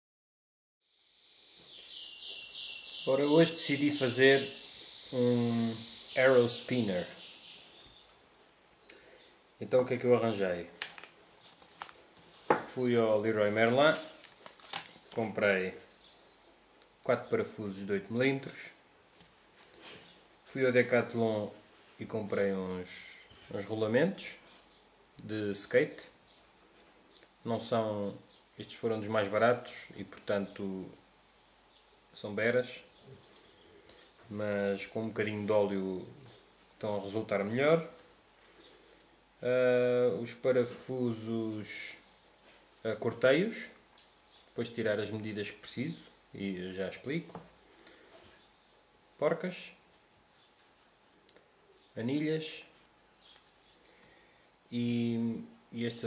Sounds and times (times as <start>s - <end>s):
Speech: 3.1s - 7.2s, 9.6s - 10.8s, 12.7s - 14.2s, 15.2s - 15.9s, 17.0s - 18.8s, 20.5s - 24.4s, 25.2s - 26.2s, 27.4s - 31.0s, 32.2s - 32.9s, 34.3s - 38.0s, 39.4s - 42.1s, 42.8s - 43.8s, 44.6s - 47.4s, 49.2s - 49.8s, 52.0s - 52.8s, 54.7s - 56.0s.